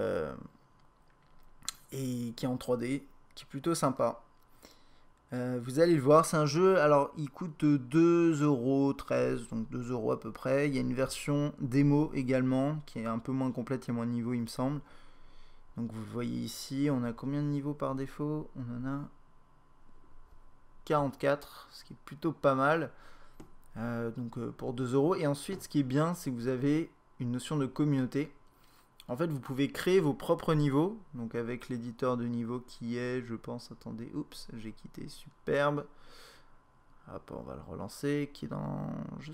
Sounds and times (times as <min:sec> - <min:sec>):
Speech: 0:00.0 - 0:00.5, 0:01.7 - 0:04.2, 0:05.3 - 0:14.9, 0:15.8 - 0:19.2, 0:20.8 - 0:23.0, 0:23.7 - 0:28.4, 0:29.0 - 0:35.9, 0:37.1 - 0:39.3.